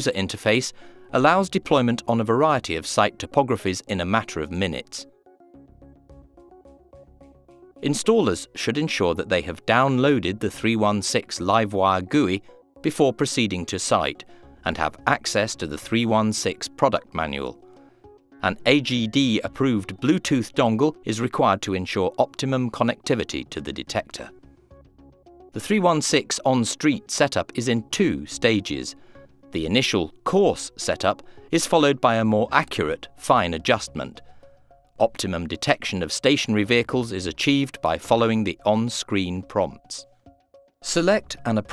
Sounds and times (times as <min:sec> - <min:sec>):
Speech: 0:00.0 - 0:05.1, 0:07.8 - 0:17.6, 0:18.4 - 0:24.3, 0:25.6 - 0:29.0, 0:29.6 - 0:34.2, 0:35.0 - 0:40.0, 0:40.9 - 0:41.7
Music: 0:00.0 - 0:41.7.